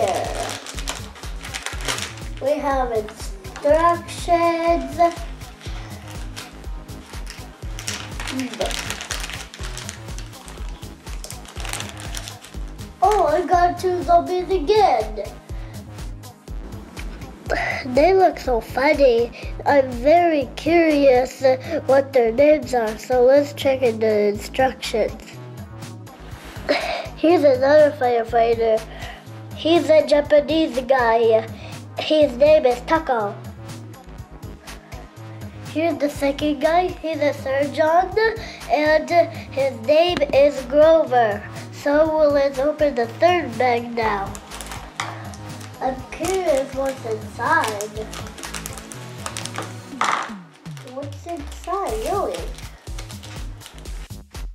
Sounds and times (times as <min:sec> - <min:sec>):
Child speech, kid speaking: 0:00.0 - 0:00.6, 0:02.4 - 0:05.4, 0:08.3 - 0:08.9, 0:13.0 - 0:15.4, 0:17.8 - 0:25.4, 0:27.2 - 0:28.9, 0:29.6 - 0:33.5, 0:35.7 - 0:44.4, 0:45.8 - 0:48.2, 0:50.8 - 0:52.6
Music: 0:00.0 - 0:54.5.